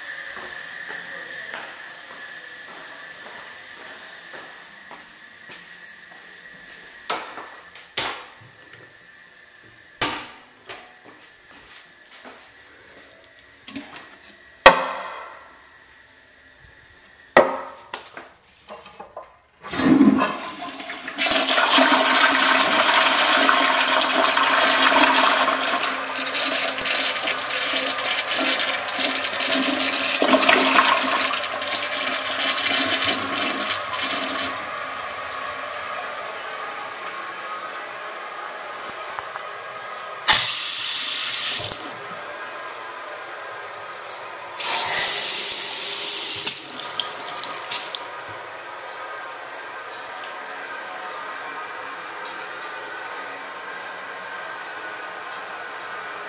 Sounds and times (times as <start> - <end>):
Sink (filling or washing): 19.8 - 34.9, 40.3 - 41.8, 44.6 - 48.3
Water tap, faucet: 20.6 - 34.9, 40.3 - 41.8, 44.6 - 48.3.